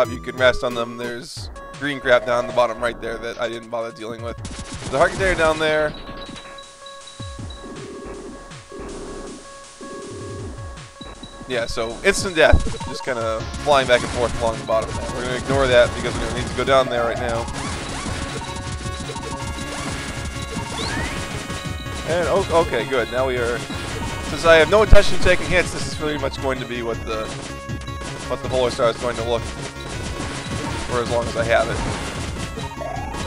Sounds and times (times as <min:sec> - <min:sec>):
Speech: 0:00.0 - 0:05.9, 0:11.5 - 0:17.5, 0:22.1 - 0:23.6, 0:24.3 - 0:27.3, 0:28.3 - 0:29.4, 0:30.8 - 0:31.8
Music: 0:00.0 - 0:33.2.